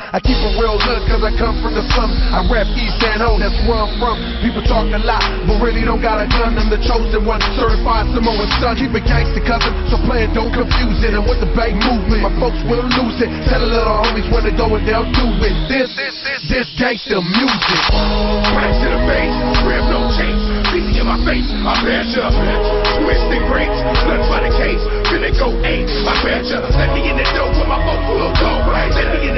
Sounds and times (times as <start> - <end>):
Hip hop music: 0.0 - 29.3
Rapping: 0.0 - 29.3.